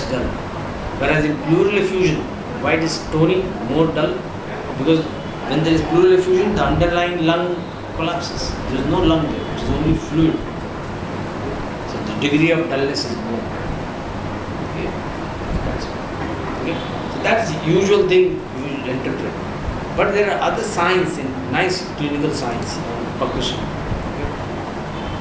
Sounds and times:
Speech: 0.0s - 0.4s, 1.0s - 10.4s, 11.9s - 13.5s, 15.6s - 19.4s, 20.0s - 24.4s.

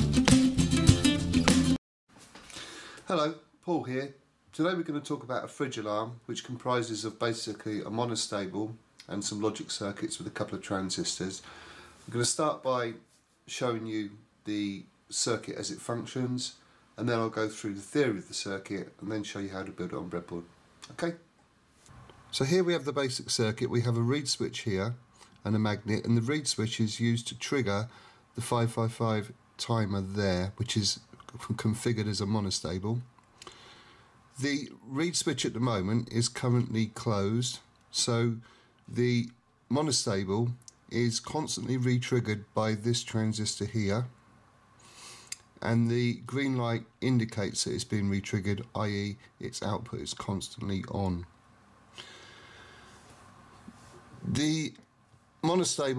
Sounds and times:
Speech: 3.1s - 11.4s, 12.1s - 21.3s, 22.3s - 33.1s, 34.4s - 44.2s, 45.6s - 51.4s, 54.2s - 55.9s.

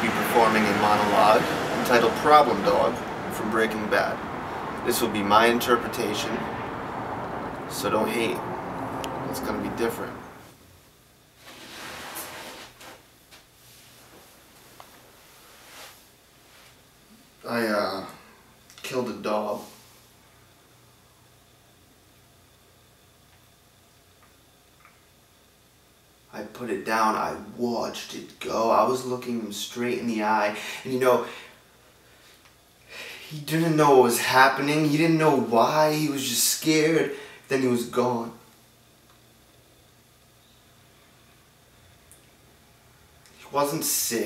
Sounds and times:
Male speech, man speaking: 0.0s - 4.2s, 4.8s - 6.5s, 7.7s - 8.4s, 9.3s - 10.2s, 17.4s - 18.2s, 18.8s - 19.8s, 26.3s - 31.4s, 33.3s - 38.5s, 43.4s - 44.2s
Narration, monologue: 0.0s - 10.6s, 17.4s - 20.1s, 26.3s - 39.2s, 43.2s - 44.2s.

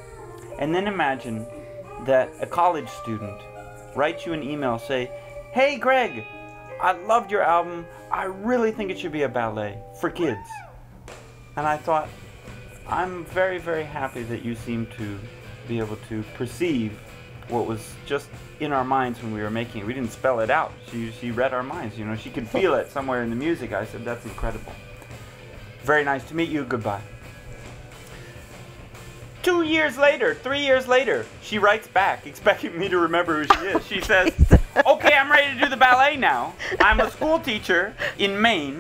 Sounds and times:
Music: 0.0s - 38.8s.

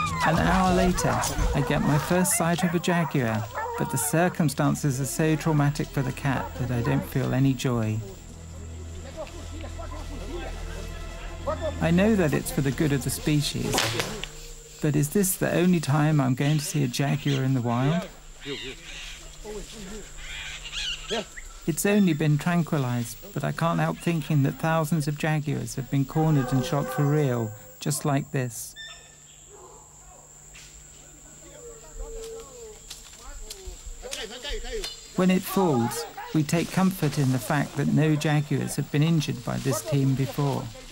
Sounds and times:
Animal: 0.0s - 7.7s, 15.9s - 22.2s, 26.1s - 28.1s, 31.0s - 40.9s
Speech: 0.2s - 8.2s, 9.1s - 14.2s, 14.8s - 18.8s, 21.2s - 28.8s, 31.1s - 40.9s.

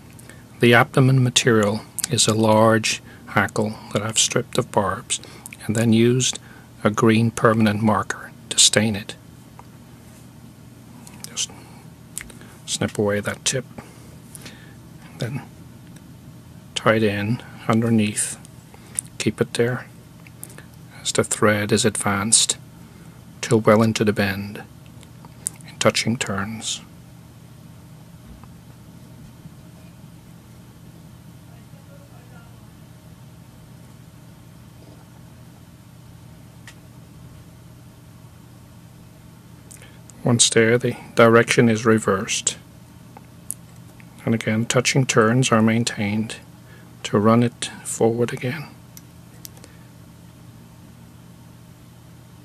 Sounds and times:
Speech: 0.6s - 9.2s, 11.3s - 11.6s, 12.7s - 13.7s, 15.2s - 15.5s, 16.8s - 18.4s, 19.2s - 19.9s, 21.0s - 22.6s, 23.4s - 24.7s, 25.6s - 26.9s, 31.4s - 32.8s, 40.2s - 42.6s, 44.2s - 48.8s.

